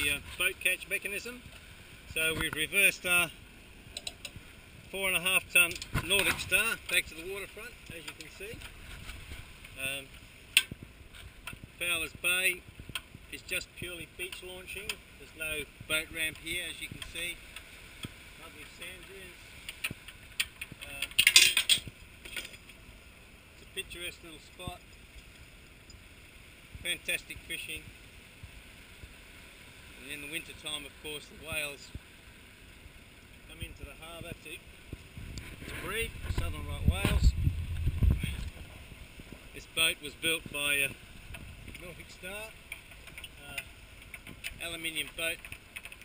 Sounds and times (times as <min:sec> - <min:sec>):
Speech: 0:00.0 - 0:01.4, 0:02.1 - 0:03.3, 0:04.9 - 0:08.6, 0:09.8 - 0:10.1, 0:11.8 - 0:12.6, 0:13.3 - 0:17.4, 0:18.4 - 0:19.4, 0:20.8 - 0:21.1, 0:23.6 - 0:24.8, 0:26.8 - 0:27.9, 0:30.0 - 0:31.9, 0:33.5 - 0:34.6, 0:35.8 - 0:37.4, 0:39.6 - 0:41.0, 0:41.8 - 0:42.6, 0:43.4 - 0:43.7, 0:44.6 - 0:45.4.